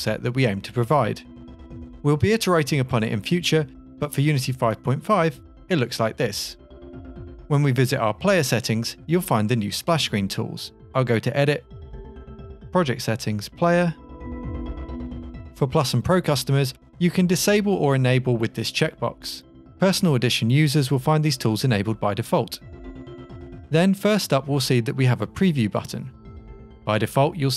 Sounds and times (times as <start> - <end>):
Speech: 0.0 - 1.2, 2.1 - 6.6, 7.5 - 11.6, 12.8 - 14.0, 15.6 - 22.6, 23.8 - 26.1, 26.9 - 27.5
Music: 0.0 - 27.5.